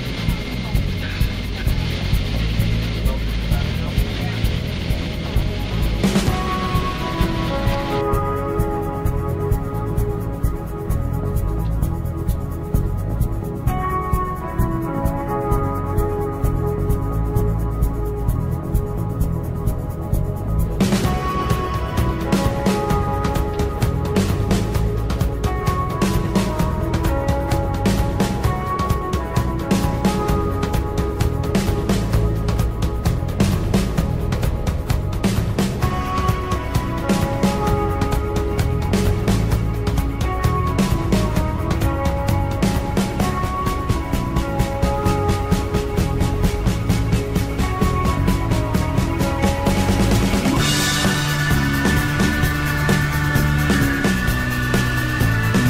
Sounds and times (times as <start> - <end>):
Background music: 0.0 - 55.6.